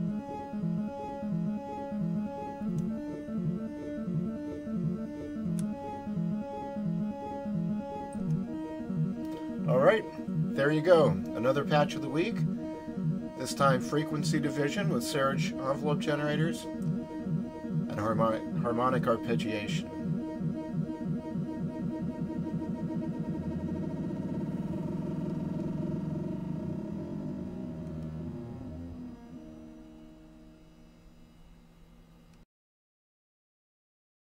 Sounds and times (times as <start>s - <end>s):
Synthesizer: 0.0s - 31.5s.